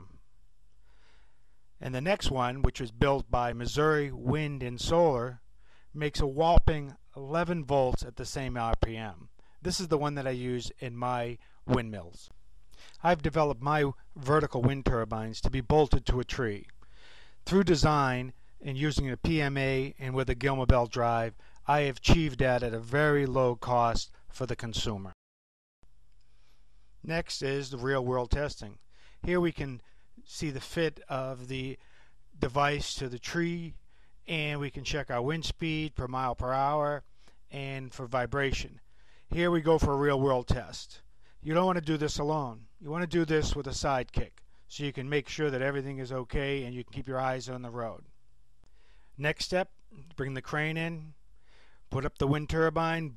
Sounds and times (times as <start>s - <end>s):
Speech: 0.0s - 0.2s, 1.8s - 5.4s, 6.0s - 12.3s, 13.0s - 16.7s, 17.4s - 25.2s, 27.0s - 31.8s, 32.4s - 48.1s, 49.2s - 51.2s, 51.9s - 53.1s.